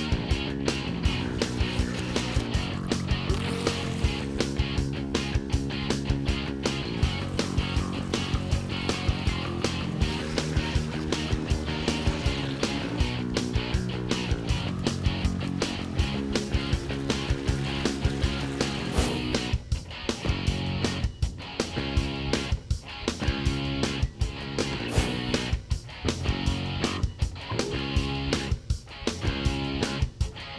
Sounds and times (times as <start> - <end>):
Music: 0.0 - 30.5.